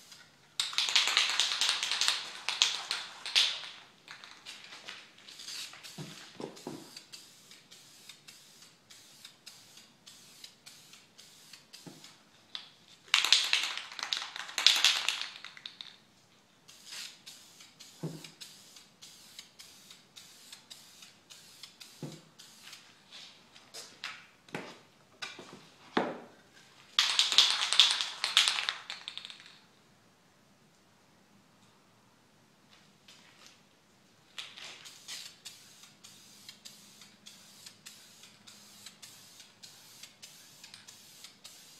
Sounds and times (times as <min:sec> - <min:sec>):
Inside, small room: 0:00.0 - 0:41.8.